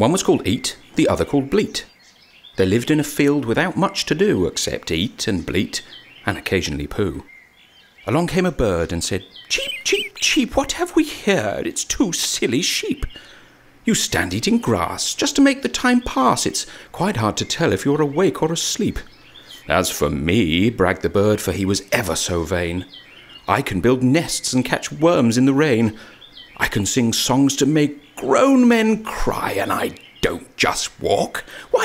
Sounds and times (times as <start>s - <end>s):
Speech: 0.0s - 1.9s, 2.6s - 7.3s, 8.1s - 13.2s, 13.9s - 22.9s, 23.5s - 26.0s, 26.6s - 31.8s.